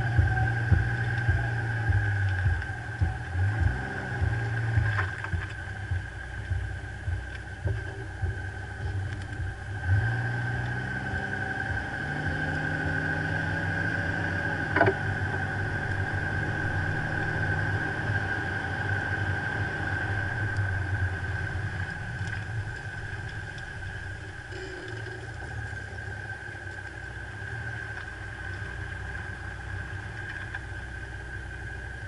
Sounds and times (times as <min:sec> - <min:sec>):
Car: 0:00.0 - 0:32.0.